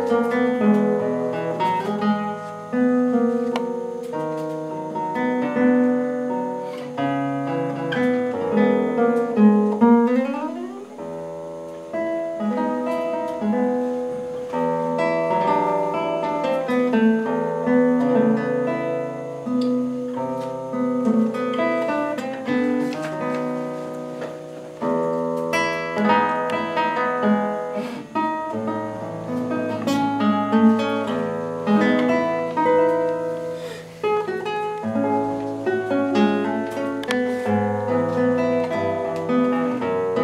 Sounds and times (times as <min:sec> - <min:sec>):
Acoustic guitar: 0:00.0 - 0:40.2
Strum: 0:00.0 - 0:40.2.